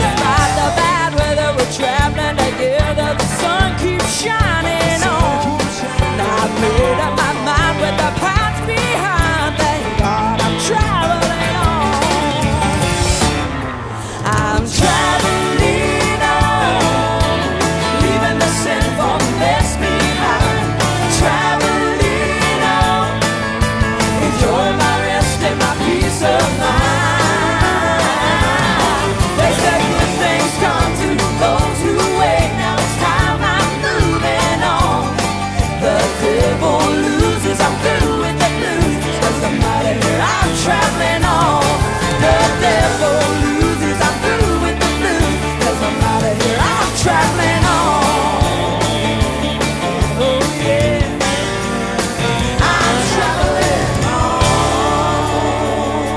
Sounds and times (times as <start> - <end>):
Singing: 0.0 - 12.4, 14.4 - 51.4, 52.5 - 56.1
Pop music: 0.0 - 56.1.